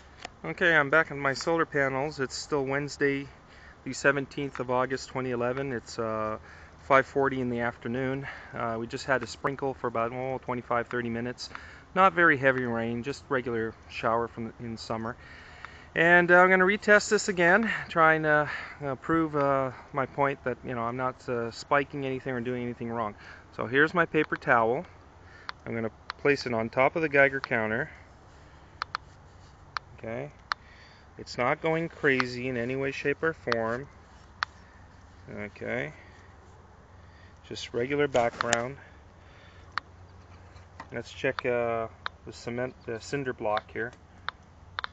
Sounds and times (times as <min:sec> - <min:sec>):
Speech: 0:00.4 - 0:15.2, 0:16.0 - 0:24.9, 0:25.6 - 0:28.0, 0:30.0 - 0:30.4, 0:31.2 - 0:33.9, 0:35.3 - 0:36.0, 0:37.4 - 0:38.9, 0:40.9 - 0:44.0.